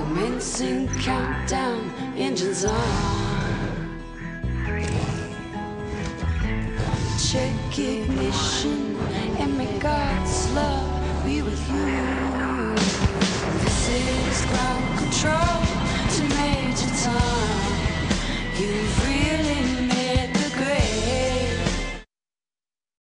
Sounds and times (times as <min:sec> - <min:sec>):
Music: 0:00.0 - 0:22.1.